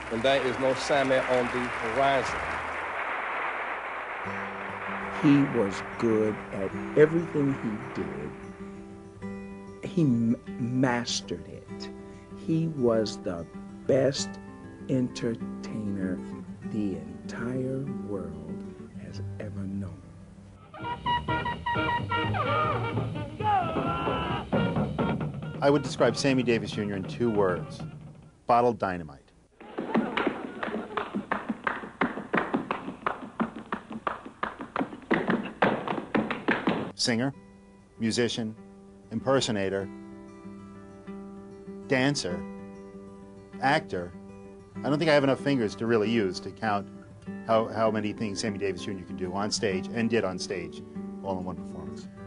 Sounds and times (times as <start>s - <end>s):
Music: 0.0s - 28.7s, 29.6s - 52.2s
Speech: 0.1s - 2.4s, 5.2s - 8.4s, 9.8s - 14.3s, 14.9s - 20.0s, 25.6s - 27.8s, 28.5s - 29.3s, 37.0s - 37.4s, 38.0s - 39.9s, 41.9s - 42.4s, 43.6s - 44.2s, 44.8s - 46.9s, 47.5s - 52.1s.